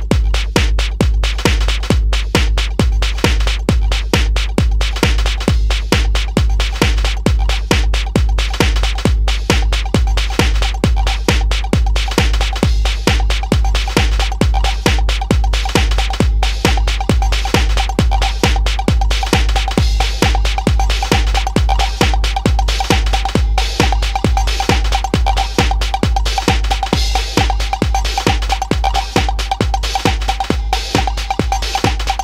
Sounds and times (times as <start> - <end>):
Techno: 0.0 - 32.2.